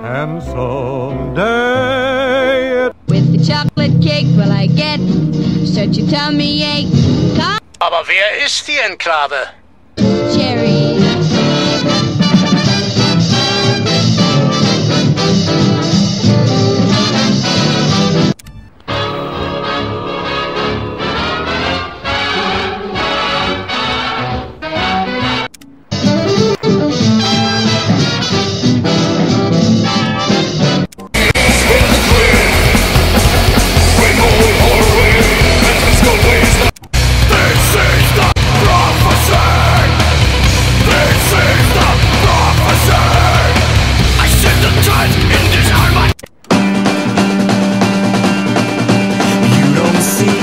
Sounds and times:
Music: 0.0 - 7.6, 10.0 - 50.4.

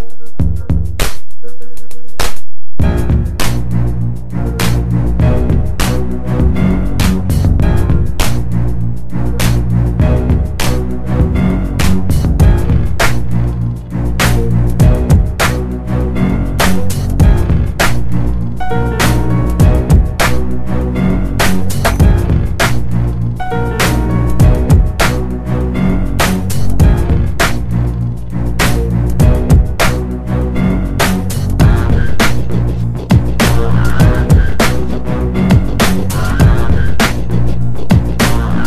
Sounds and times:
Music: 0.0 - 38.6.

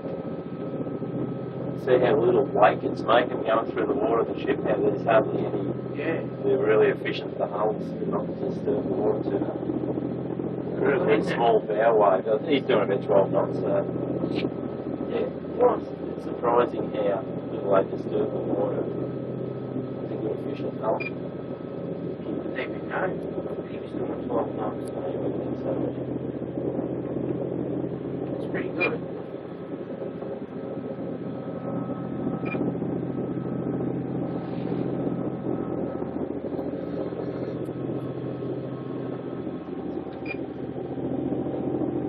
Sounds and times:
Motorboat, speedboat: 0.0 - 42.0
Wind noise (microphone): 0.0 - 42.0.

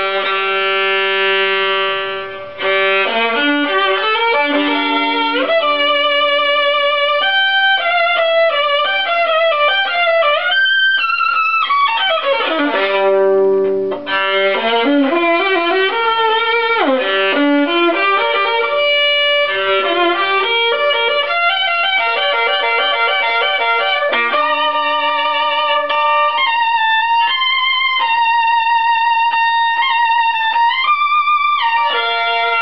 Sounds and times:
Violin, fiddle: 0.0 - 32.6.

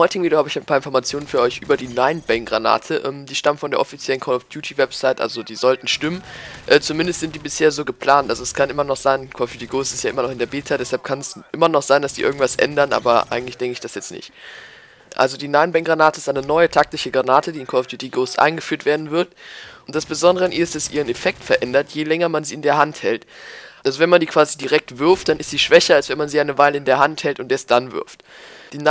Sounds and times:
Speech: 0.0 - 14.3, 15.1 - 19.3, 19.9 - 23.3, 23.9 - 28.2.

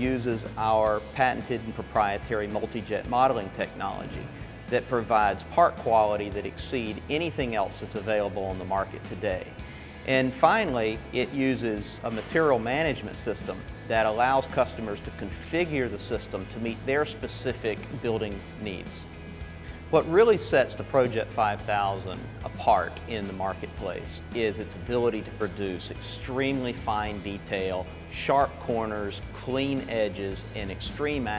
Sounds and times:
Speech: 0.0 - 19.1, 19.9 - 31.3
Music: 0.0 - 31.3.

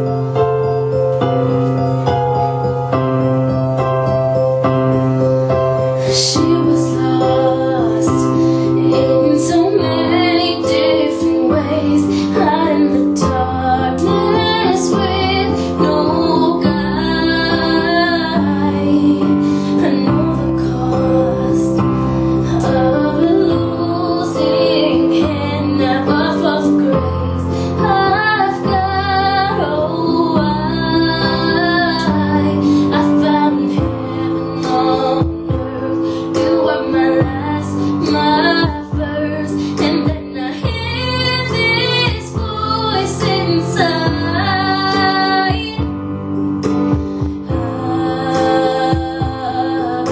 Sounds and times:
Music: 0.0 - 50.1
Female singing: 6.0 - 21.9, 22.5 - 45.9, 47.5 - 50.1.

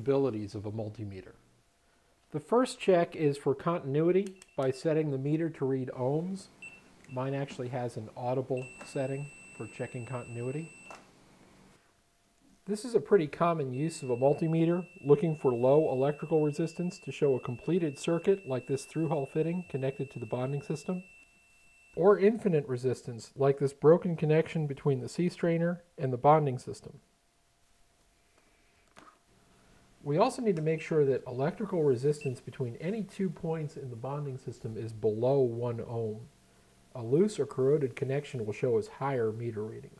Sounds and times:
Speech: 0.0 - 1.4, 2.3 - 6.5, 7.1 - 10.7, 12.6 - 21.0, 22.0 - 27.0, 30.0 - 36.3, 36.9 - 39.9.

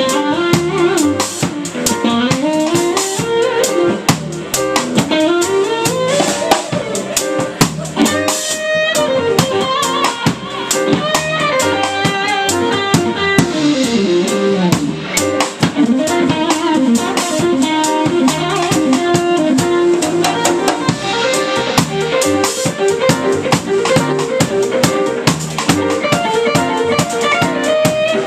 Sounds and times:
Bass guitar: 0.0 - 28.2
Electric guitar: 0.0 - 28.2.

